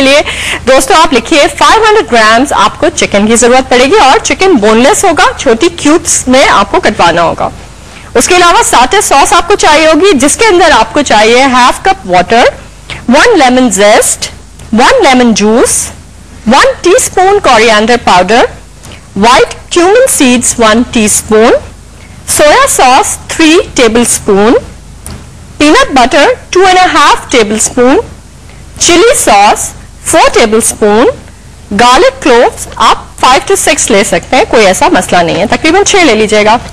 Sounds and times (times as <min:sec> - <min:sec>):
Speech: 0:00.0 - 0:18.6, 0:19.2 - 0:21.7, 0:22.3 - 0:24.7, 0:25.6 - 0:28.1, 0:28.8 - 0:36.6.